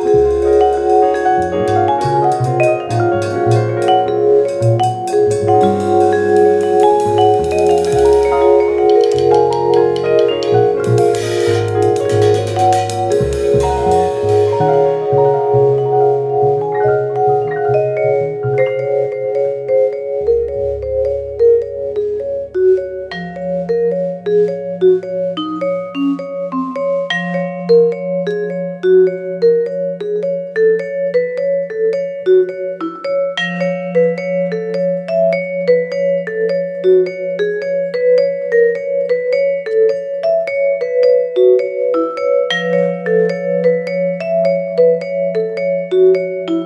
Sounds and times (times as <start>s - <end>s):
Marimba, xylophone: 0.0s - 46.6s
Vibraphone: 0.0s - 46.6s.